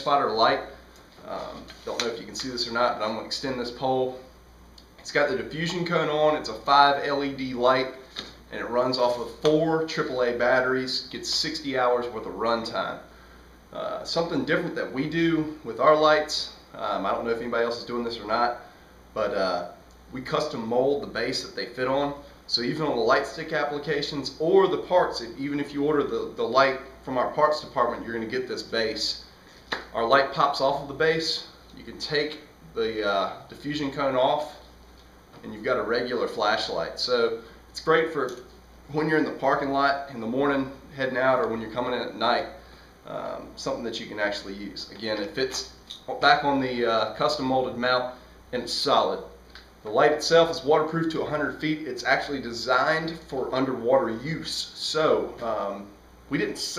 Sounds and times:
Speech: 0.0s - 4.3s, 5.0s - 13.1s, 13.7s - 29.3s, 29.9s - 34.7s, 35.4s - 56.7s.

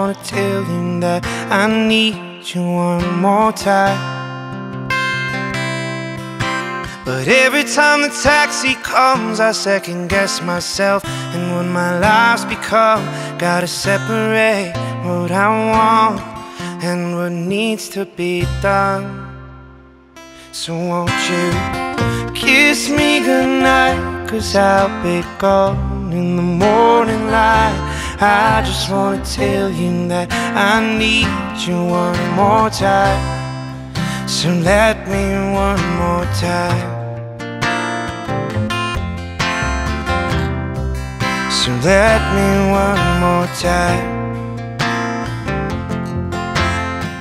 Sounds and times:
Music: 0.0s - 47.2s.

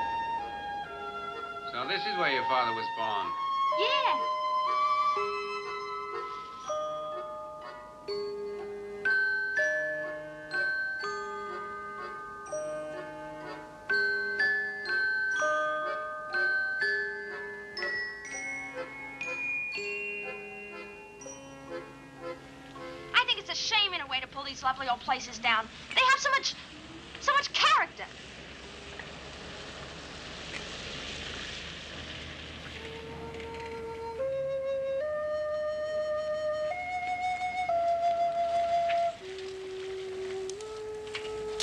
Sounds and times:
Music: 0.0s - 24.9s, 32.7s - 41.6s.

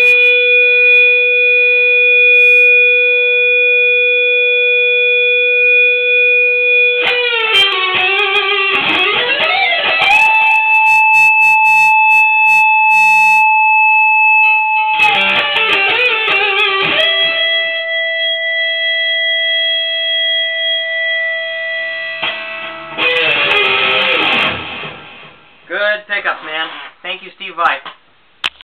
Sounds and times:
Bass guitar: 0.0s - 1.4s, 5.7s - 13.4s, 14.9s - 25.5s
Strum: 22.2s - 25.6s
Speech: 25.7s - 28.0s.

